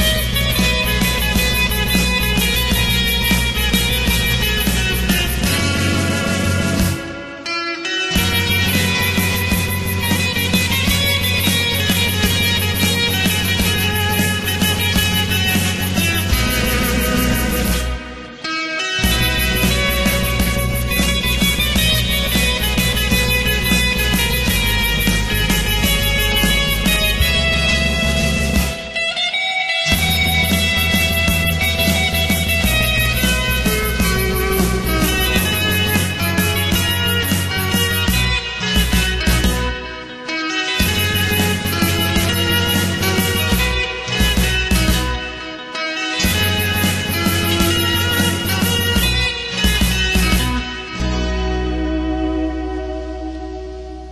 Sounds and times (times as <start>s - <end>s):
Guitar: 0.0s - 54.1s.